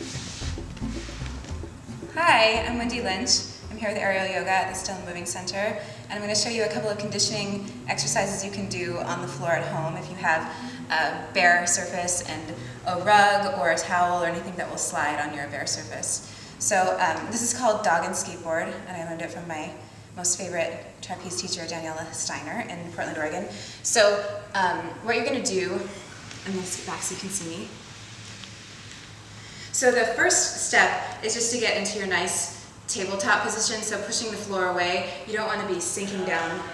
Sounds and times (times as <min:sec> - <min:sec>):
Speech: 0:02.2 - 0:27.7, 0:29.8 - 0:36.7.